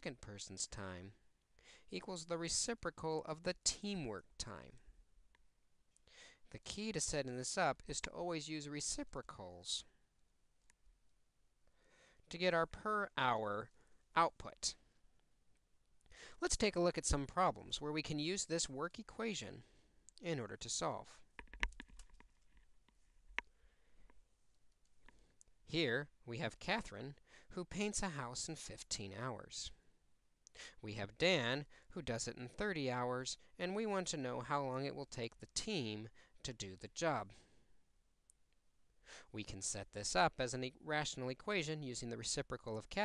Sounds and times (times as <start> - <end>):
Speech: 0.0 - 1.2, 1.9 - 4.9, 6.5 - 10.0, 12.3 - 14.8, 16.4 - 21.3, 25.7 - 29.8, 30.8 - 37.4, 39.3 - 43.0
Inside, small room: 0.0 - 43.0.